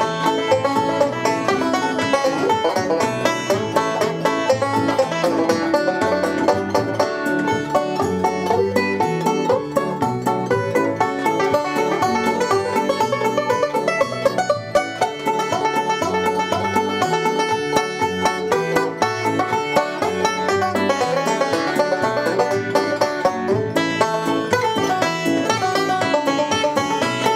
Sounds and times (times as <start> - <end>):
Banjo: 0.0 - 27.3
Bluegrass: 0.0 - 27.3.